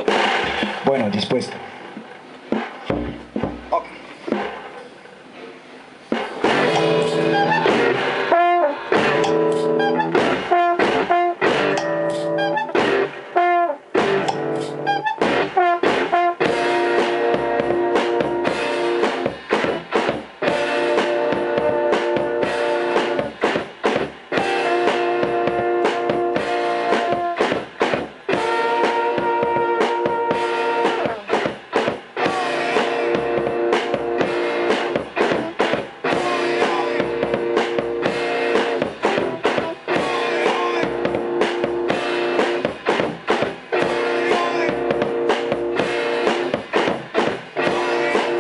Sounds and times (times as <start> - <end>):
Music: 2.5 - 4.7, 6.1 - 48.4.